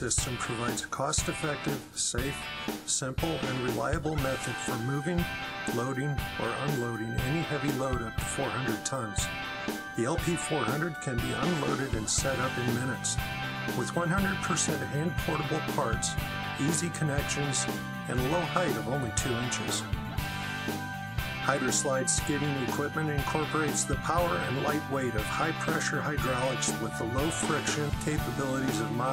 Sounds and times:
Speech: 0.0 - 9.3, 10.0 - 13.2, 13.8 - 19.9, 21.4 - 29.1
Music: 0.0 - 29.1.

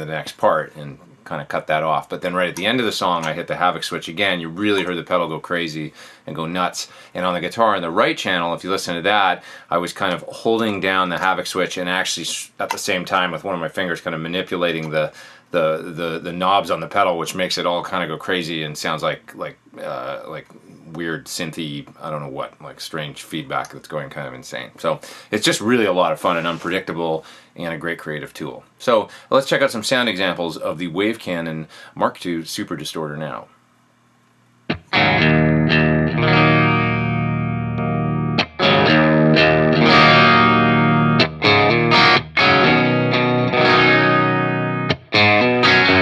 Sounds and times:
Speech: 0.0 - 33.5
Distortion: 0.0 - 46.0
Bass guitar: 34.7 - 46.0
Effects unit: 34.7 - 46.0.

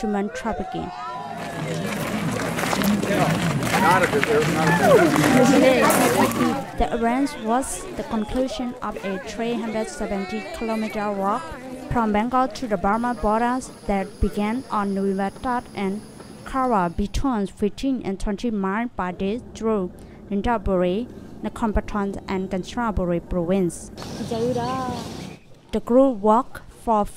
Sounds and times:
Walk, footsteps: 1.2 - 6.6.

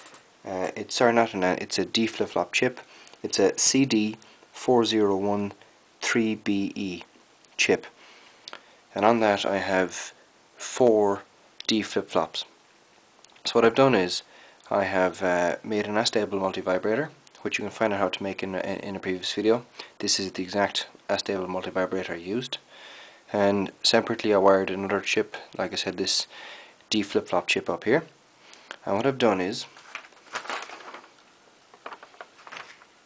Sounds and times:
Speech: 0.4 - 8.0, 8.9 - 12.6, 13.4 - 22.6, 23.3 - 26.3, 26.9 - 28.2, 28.8 - 29.8.

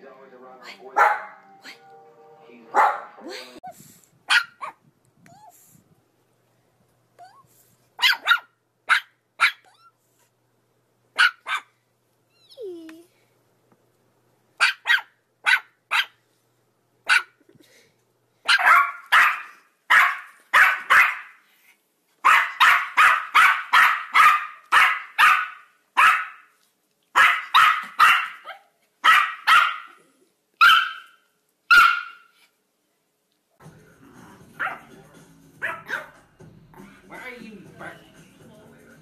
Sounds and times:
Bark: 1.0 - 1.4, 2.7 - 3.1, 4.3 - 4.8, 8.0 - 9.6, 11.2 - 11.7, 14.6 - 16.2, 17.1 - 17.4, 18.4 - 21.4, 22.2 - 26.5, 27.1 - 30.0, 30.6 - 32.3, 34.6 - 34.9, 35.6 - 36.2
Yip: 1.0 - 1.4, 2.8 - 3.1, 4.3 - 4.8, 8.0 - 10.0, 11.2 - 11.7, 14.6 - 16.2, 17.1 - 17.4, 18.4 - 21.4, 22.2 - 26.5, 27.1 - 30.0, 30.6 - 32.4, 34.6 - 34.8, 35.6 - 36.2.

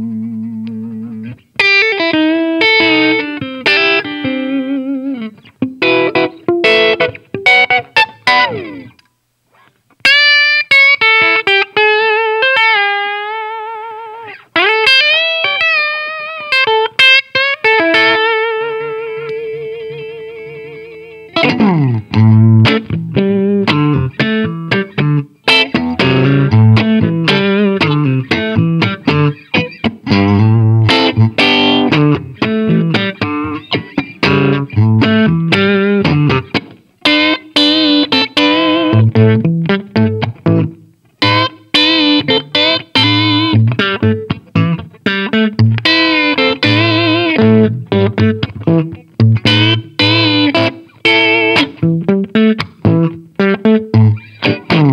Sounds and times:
Bass guitar: 0.0 - 9.0, 17.8 - 54.9.

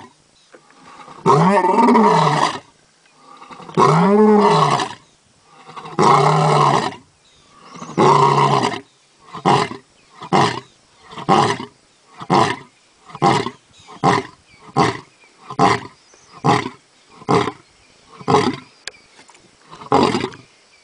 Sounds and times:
Roar: 0.8 - 17.6, 18.2 - 18.7, 19.7 - 20.5.

